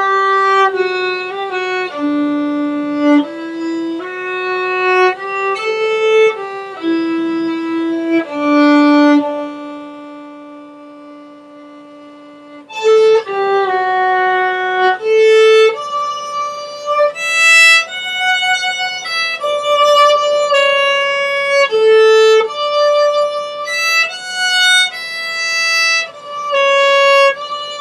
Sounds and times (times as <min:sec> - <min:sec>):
Violin, fiddle: 0:00.0 - 0:27.8.